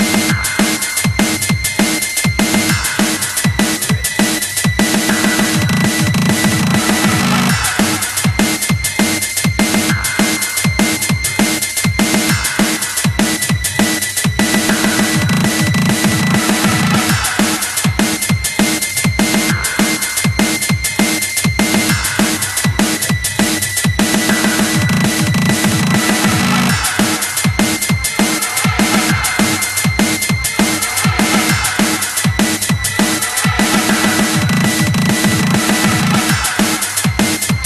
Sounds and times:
Music: 0.0s - 37.6s.

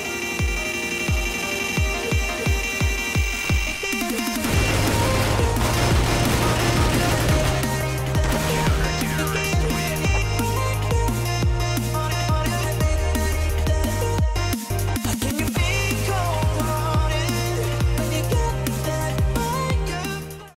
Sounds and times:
Music: 0.0s - 20.5s.

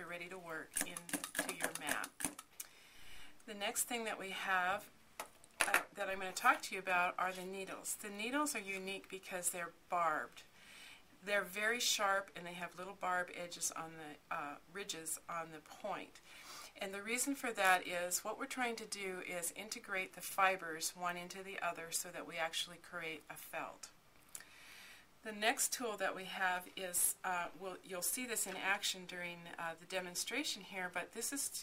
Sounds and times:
Speech: 0.0s - 2.1s, 3.5s - 4.9s, 5.6s - 10.4s, 11.2s - 16.1s, 16.8s - 23.9s, 25.2s - 31.6s.

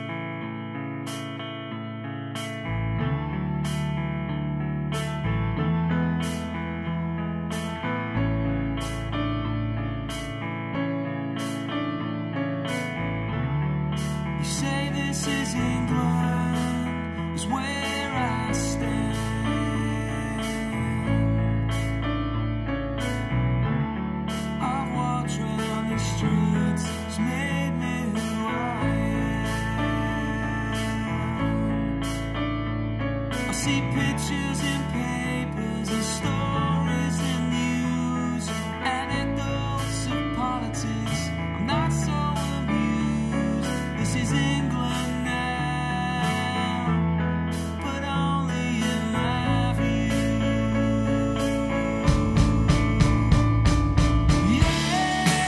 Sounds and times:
Music: 0.0s - 55.4s.

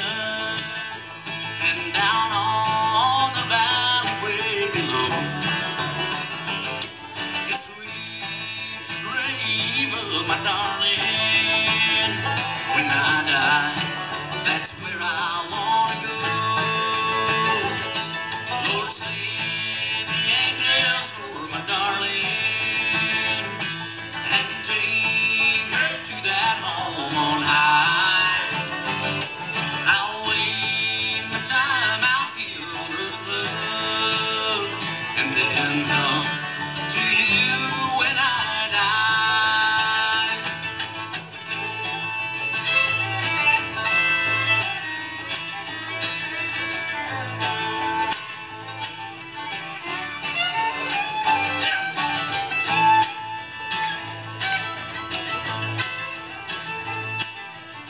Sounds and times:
Music: 0.0s - 57.8s.

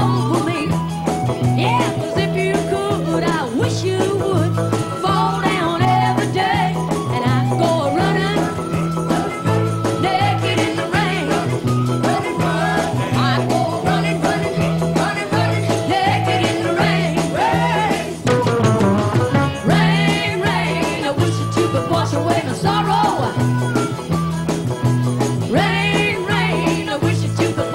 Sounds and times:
Music: 0.0s - 27.7s.

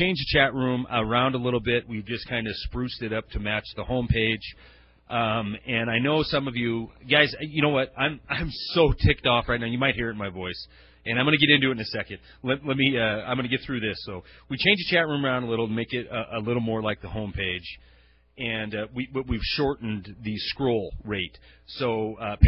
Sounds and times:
Speech: 0.0s - 17.8s, 18.4s - 22.4s.

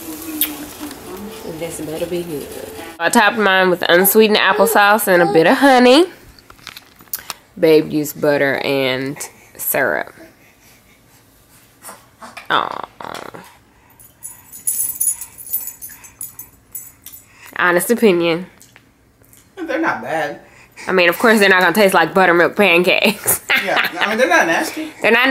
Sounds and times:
Inside, small room: 0.0s - 25.3s.

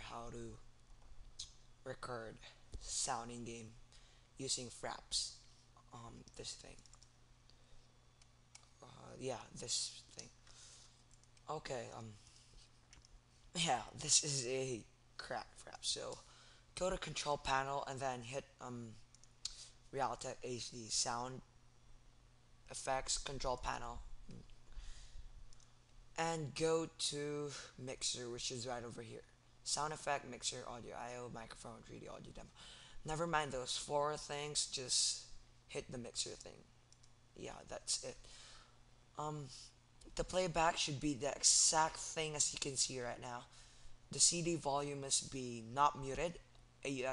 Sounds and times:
Speech: 0.0s - 0.6s, 1.4s - 3.8s, 4.4s - 6.8s, 8.8s - 10.4s, 11.4s - 12.2s, 13.6s - 21.5s, 22.7s - 24.5s, 26.2s - 36.7s, 37.4s - 38.2s, 39.2s - 43.5s, 44.1s - 47.1s.

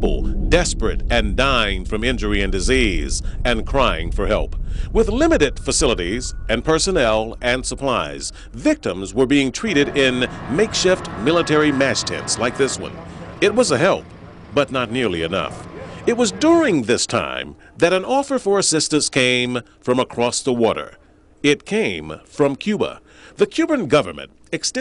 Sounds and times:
Speech: 0.0s - 24.8s.

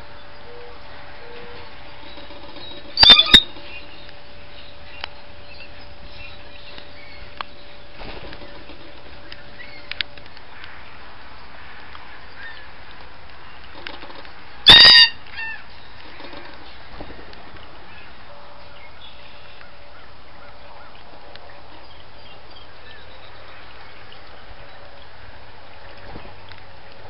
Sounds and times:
Outside, rural or natural: 0.0s - 27.1s.

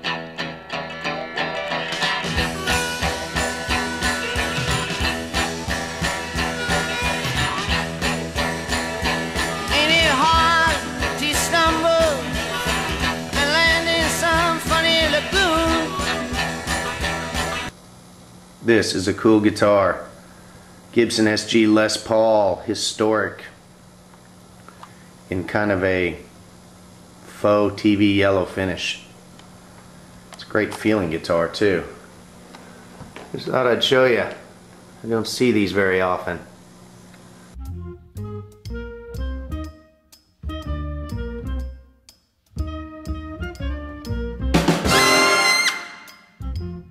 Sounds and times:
Music: 0.0s - 17.8s, 37.5s - 46.9s
Speech: 18.6s - 20.2s, 20.9s - 23.6s, 25.3s - 26.3s, 27.3s - 29.1s, 30.4s - 32.0s, 33.3s - 36.6s.

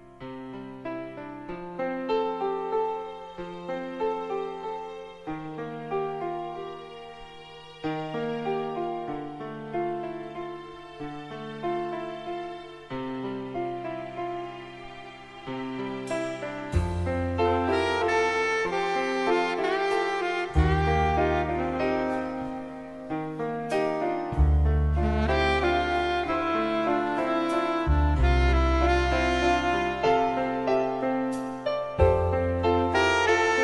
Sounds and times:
Music: 0.0s - 33.6s.

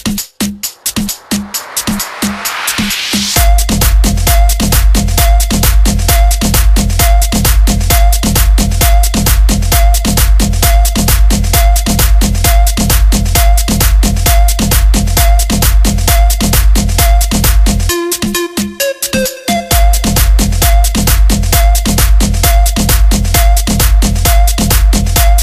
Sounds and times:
Music: 0.0s - 25.4s.

